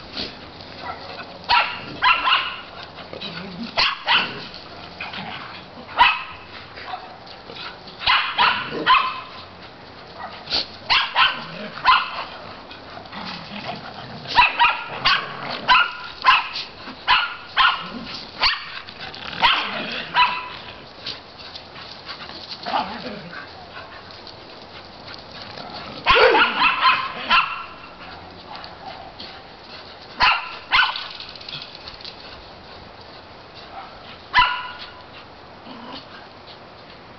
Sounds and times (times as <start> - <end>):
Bow-wow: 0.8 - 2.7, 3.8 - 4.5, 6.0 - 6.4, 8.1 - 9.4, 10.2 - 12.3, 14.3 - 18.8, 19.4 - 20.7, 26.0 - 27.9, 30.2 - 31.1, 33.8 - 35.0.